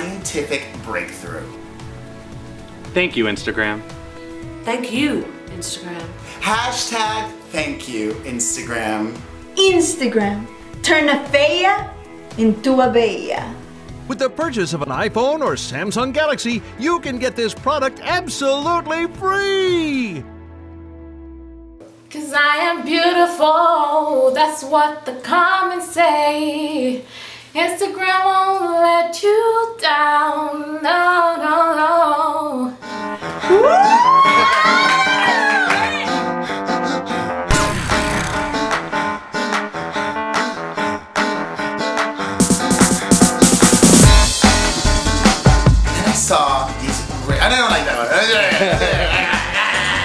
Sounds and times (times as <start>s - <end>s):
Music: 0.0s - 50.0s.